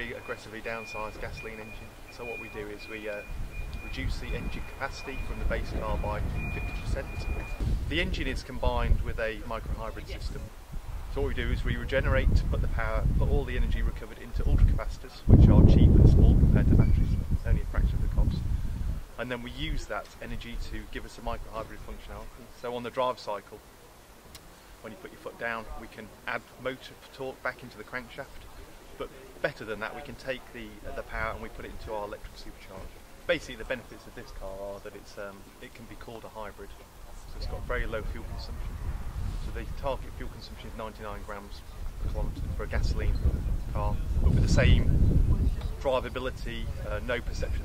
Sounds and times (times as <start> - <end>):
Speech: 0.0 - 10.5, 11.2 - 18.4, 19.2 - 23.6, 24.8 - 38.8, 39.4 - 47.6.